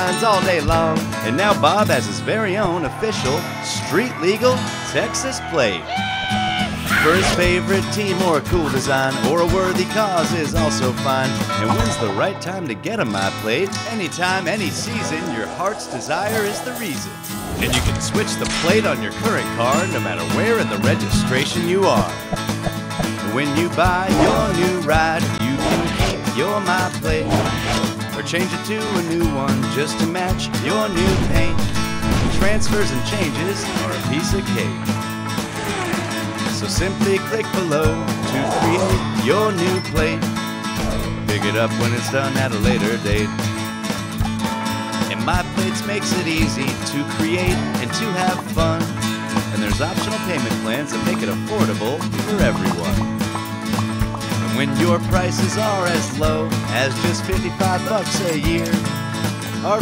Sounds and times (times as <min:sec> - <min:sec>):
Speech: 0:00.0 - 0:05.9, 0:06.9 - 0:22.2, 0:23.2 - 0:27.4, 0:28.2 - 0:31.7, 0:32.3 - 0:34.8, 0:36.5 - 0:40.2, 0:41.3 - 0:43.3, 0:45.1 - 0:48.9, 0:49.5 - 0:53.0, 0:54.5 - 0:58.8, 0:59.6 - 0:59.8
Music: 0:00.0 - 0:59.8.